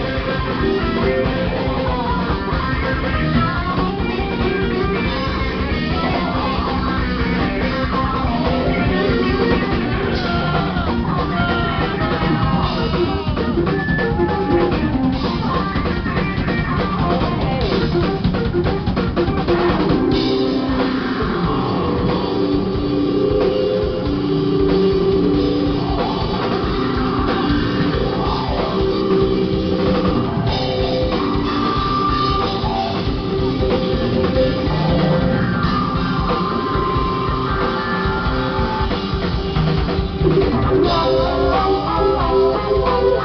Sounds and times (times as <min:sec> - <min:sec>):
Heavy metal: 0:00.0 - 0:43.2
Progressive rock: 0:00.0 - 0:43.2.